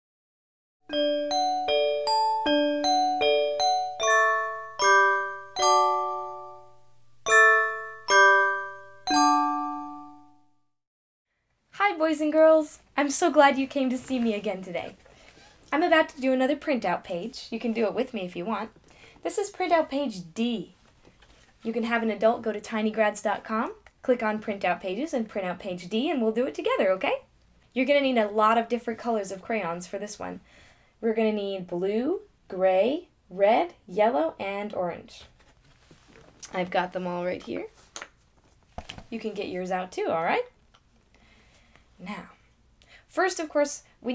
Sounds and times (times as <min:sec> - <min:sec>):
Marimba, xylophone: 0:00.9 - 0:10.4
Glockenspiel: 0:00.9 - 0:10.7.